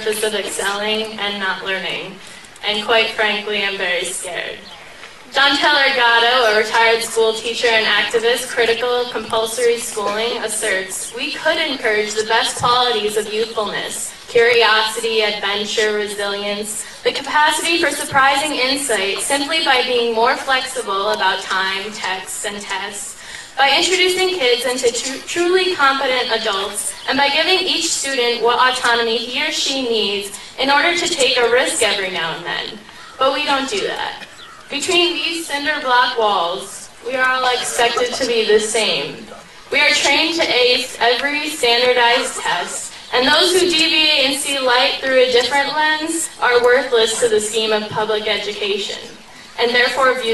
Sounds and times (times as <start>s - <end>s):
Female speech, woman speaking: 0.0s - 4.7s, 5.3s - 50.3s.